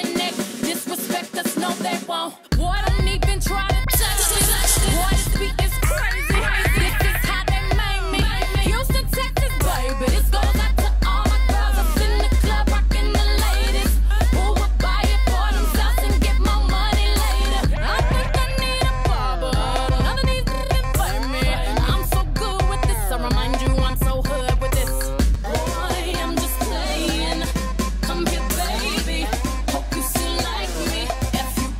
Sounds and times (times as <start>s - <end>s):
Music of Asia: 2.6s - 31.7s.